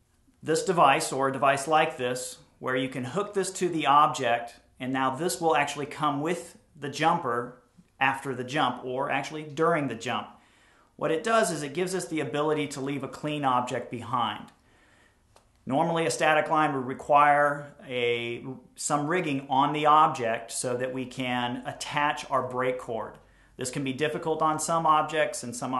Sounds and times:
Speech: 0.4s - 10.4s, 11.0s - 14.6s, 15.6s - 25.7s.

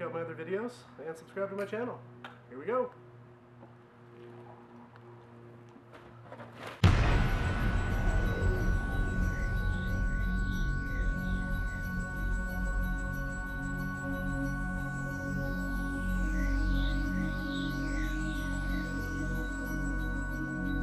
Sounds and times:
Music: 6.8s - 20.8s.

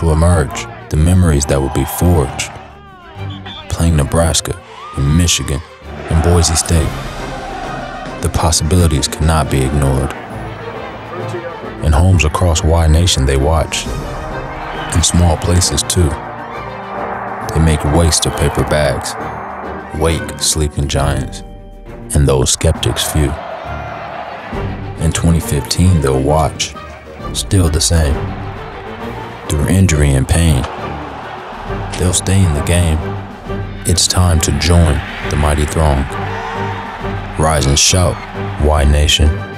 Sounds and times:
Speech: 0.0s - 7.0s, 8.2s - 10.2s, 11.1s - 14.0s, 14.9s - 16.2s, 17.4s - 19.2s, 19.9s - 21.5s, 22.1s - 23.4s, 25.0s - 28.3s, 29.5s - 30.7s, 31.9s - 33.1s, 33.8s - 36.2s, 37.4s - 39.4s
Music: 0.0s - 39.5s.

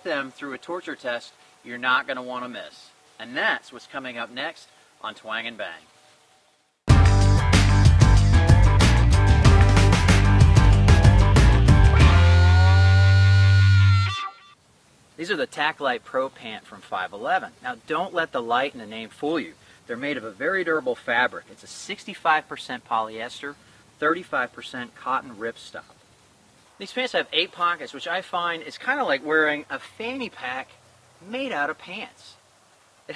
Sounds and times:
Speech: 0.0s - 5.9s, 15.2s - 25.9s, 26.8s - 32.4s.

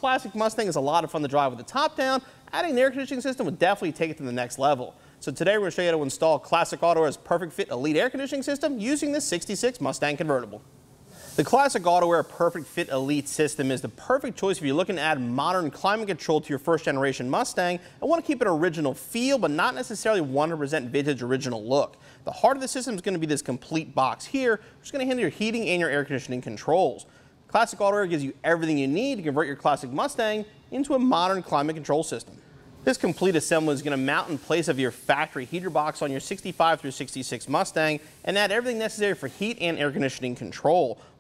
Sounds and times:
Speech: 0.0s - 10.6s, 11.4s - 41.0s.

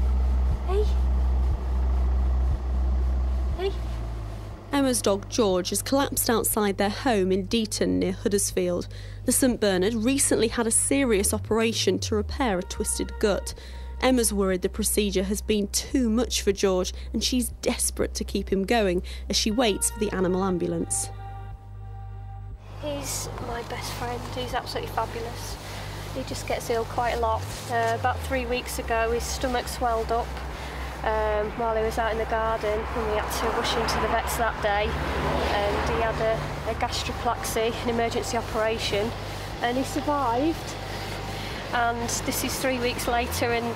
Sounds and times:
Speech: 0.6s - 1.0s, 3.6s - 3.9s, 4.7s - 21.1s, 22.8s - 25.6s, 26.2s - 30.4s, 31.0s - 34.9s, 35.5s - 40.8s, 41.7s - 43.7s.

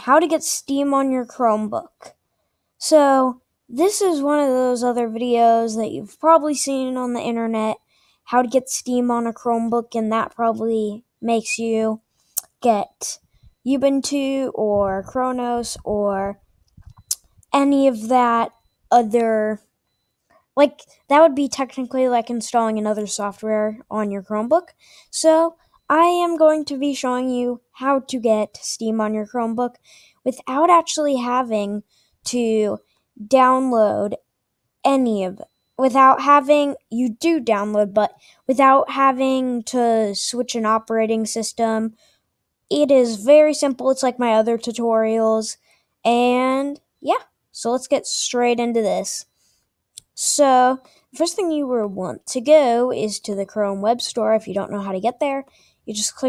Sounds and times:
Speech: 0.0s - 2.1s, 2.8s - 16.4s, 17.6s - 19.6s, 20.6s - 34.2s, 34.9s - 42.0s, 42.7s - 49.3s, 50.0s - 56.2s.

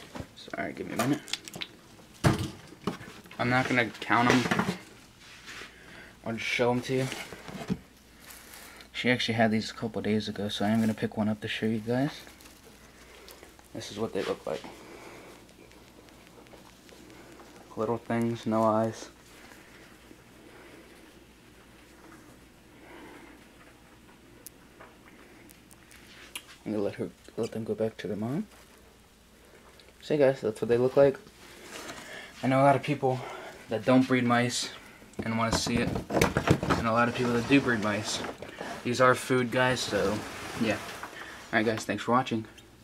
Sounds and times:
Speech: 0.4s - 1.3s, 3.4s - 4.8s, 6.2s - 7.2s, 8.9s - 12.3s, 13.7s - 14.7s, 17.7s - 19.2s, 26.6s - 28.5s, 30.0s - 31.2s, 32.4s - 36.0s, 36.7s - 42.6s.

